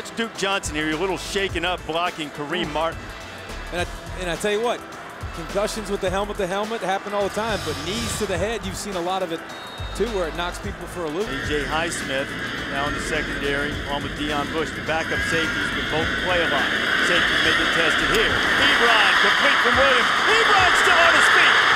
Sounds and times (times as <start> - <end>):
Speech: 0.0 - 3.0, 3.7 - 4.8, 5.4 - 9.4, 10.0 - 21.6
Music: 0.0 - 21.7.